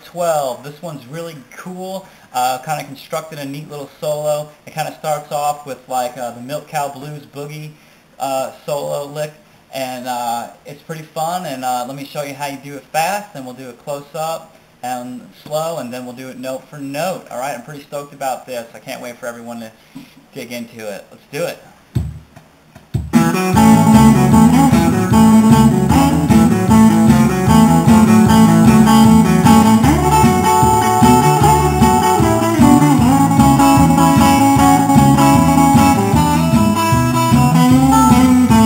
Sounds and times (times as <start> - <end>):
Strum: 23.0 - 38.6
Acoustic guitar: 23.1 - 38.6.